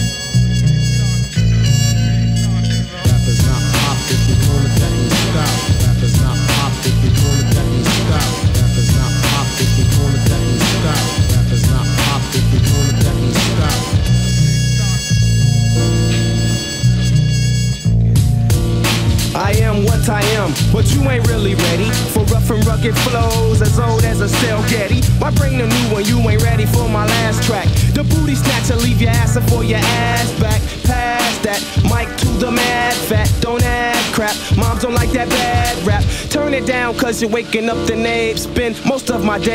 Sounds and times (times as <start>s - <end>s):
Music: 0.0s - 39.5s.